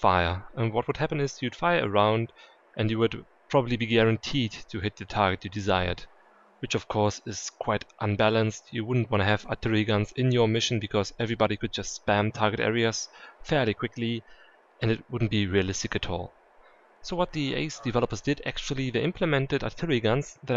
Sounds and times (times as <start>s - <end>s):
Speech: 0.0s - 6.0s, 6.6s - 14.2s, 14.8s - 16.3s, 17.1s - 20.5s.